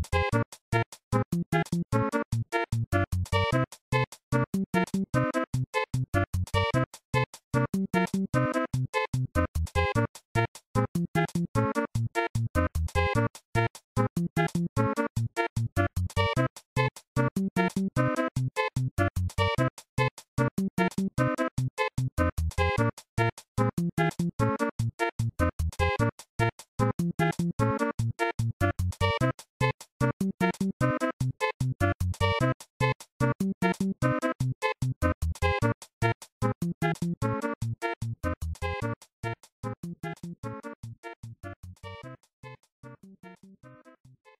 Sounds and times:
Video game music: 0.0s - 44.3s.

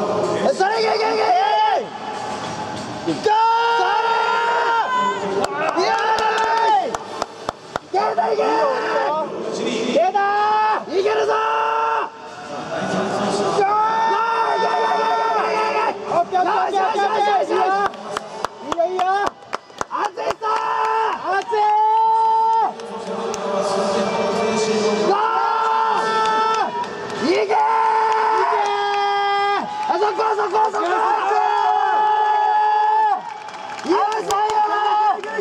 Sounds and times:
Inside, public space: 0.0s - 35.4s.

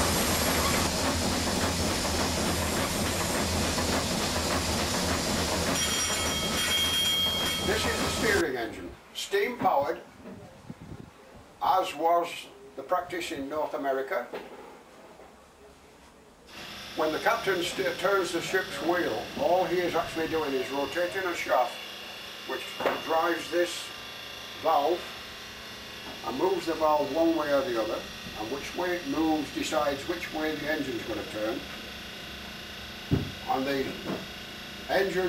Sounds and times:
Speech: 7.7s - 10.6s, 11.2s - 14.4s, 17.0s - 21.8s, 22.5s - 23.9s, 24.6s - 25.1s, 26.2s - 31.7s, 33.5s - 34.1s, 34.9s - 35.2s.

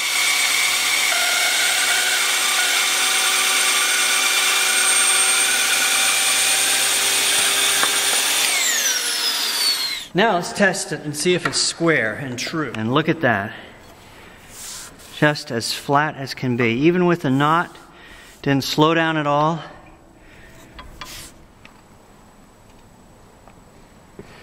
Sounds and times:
Wood: 0.0s - 10.1s
Tools: 7.4s - 8.6s
Speech: 10.2s - 13.7s, 15.2s - 17.8s, 18.4s - 19.8s.

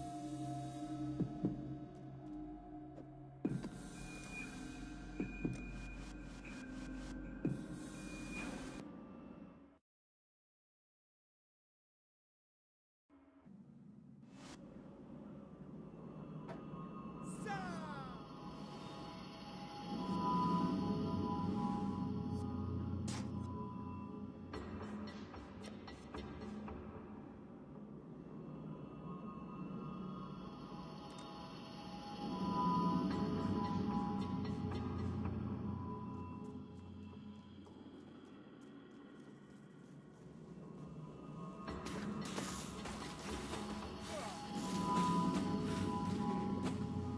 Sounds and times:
Music: 0.0s - 9.8s, 13.2s - 47.1s.

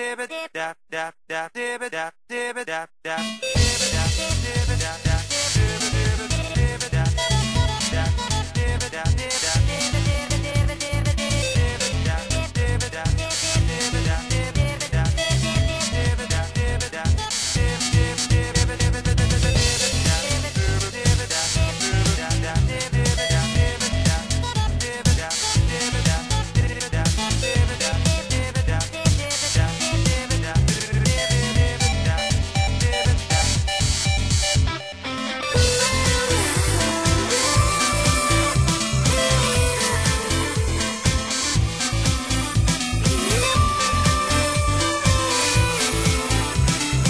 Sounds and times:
Disco: 3.1s - 47.0s.

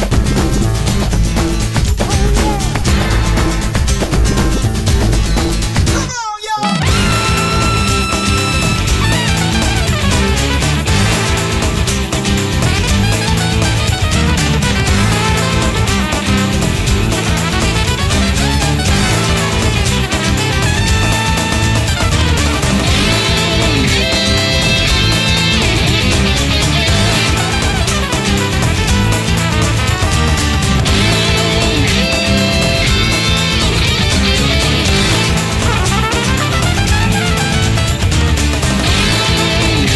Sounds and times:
Music: 0.0s - 39.9s.

